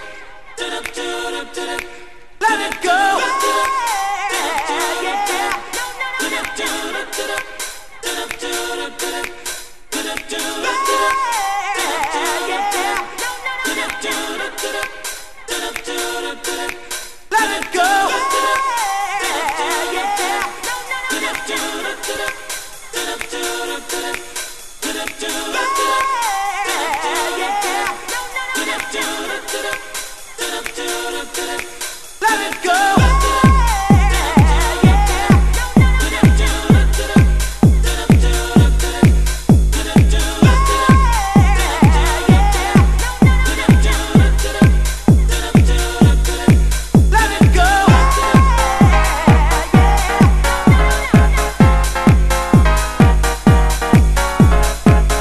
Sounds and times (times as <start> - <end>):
Music: 0.0 - 55.2.